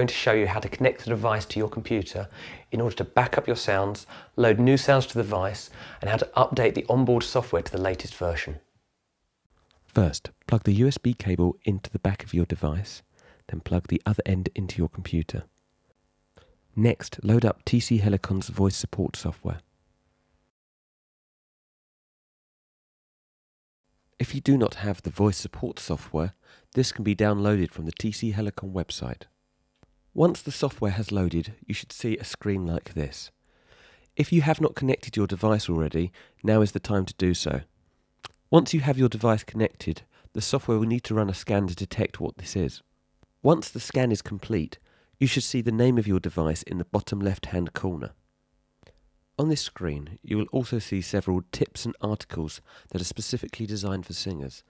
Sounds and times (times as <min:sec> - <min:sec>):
Speech: 0:00.0 - 0:08.7, 0:09.9 - 0:15.5, 0:16.8 - 0:19.6, 0:24.2 - 0:29.3, 0:30.2 - 0:33.4, 0:34.2 - 0:37.7, 0:38.3 - 0:48.2, 0:49.4 - 0:54.6.